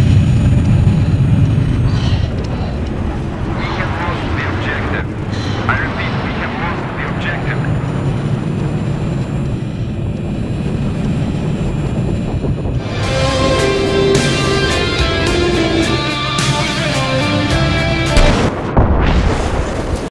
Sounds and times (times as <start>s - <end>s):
Music: 12.8s - 18.6s.